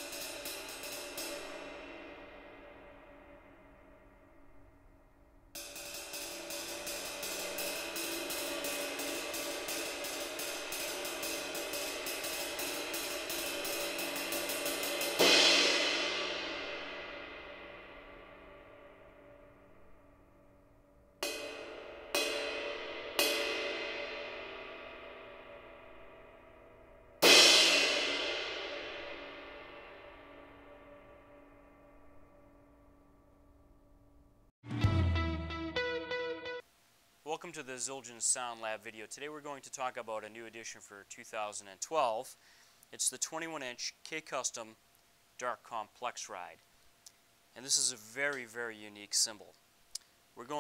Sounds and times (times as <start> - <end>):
Music: 0.0 - 36.7.